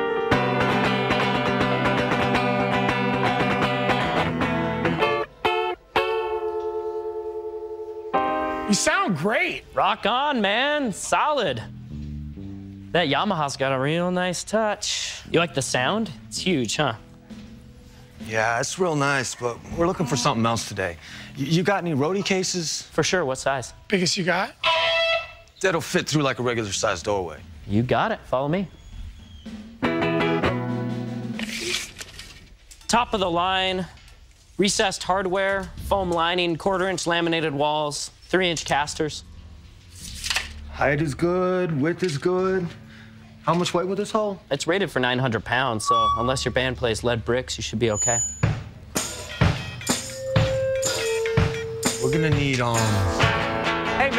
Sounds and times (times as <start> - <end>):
Music: 0.0 - 23.6, 24.6 - 25.5, 29.2 - 32.4, 38.4 - 54.1.